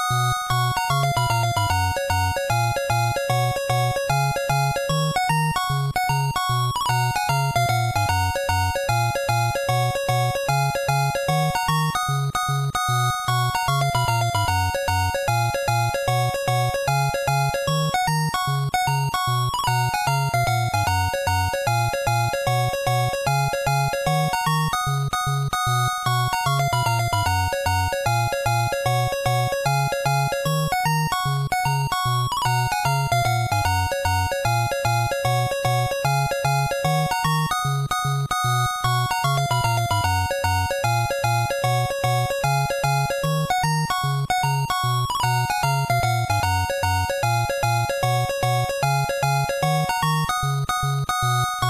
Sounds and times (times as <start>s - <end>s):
Music: 0.0s - 51.7s.